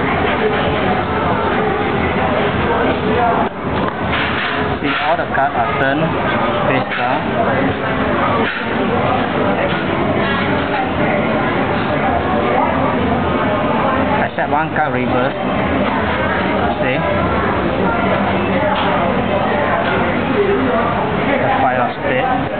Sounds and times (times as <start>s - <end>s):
Speech: 4.7s - 22.5s.